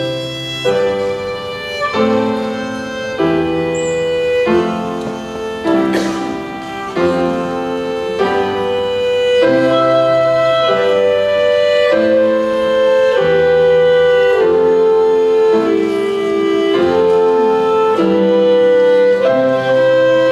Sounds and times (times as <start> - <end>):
Violin, fiddle: 0.0 - 20.3.